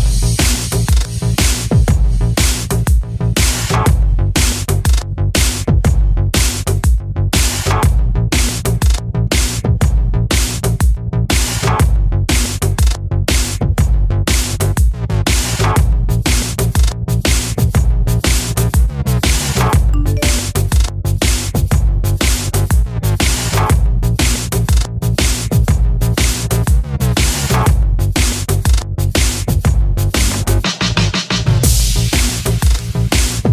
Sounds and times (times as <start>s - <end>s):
Music: 0.0s - 33.5s.